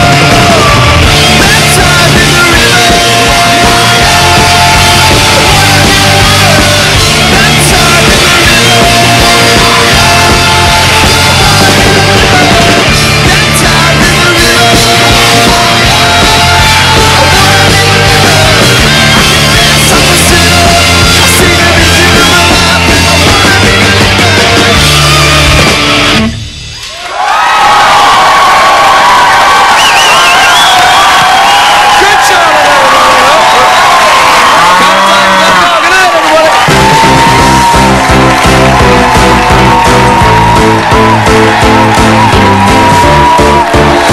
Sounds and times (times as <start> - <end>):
Music: 0.0 - 27.0, 36.5 - 44.1
Inside, large room or hall: 0.0 - 44.1
Speech: 35.0 - 36.6.